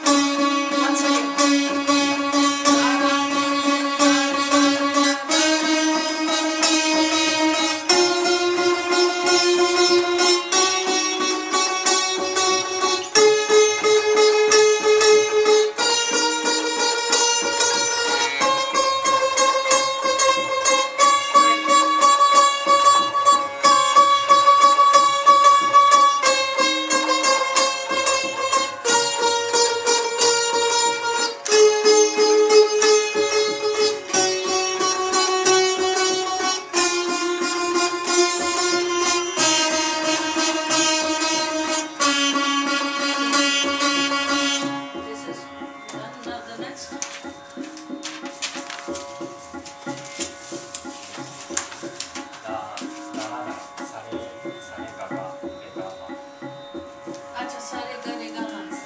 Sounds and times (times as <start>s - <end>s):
Carnatic music: 0.0s - 58.8s
Classical music: 0.0s - 58.8s
Sitar: 0.0s - 58.8s.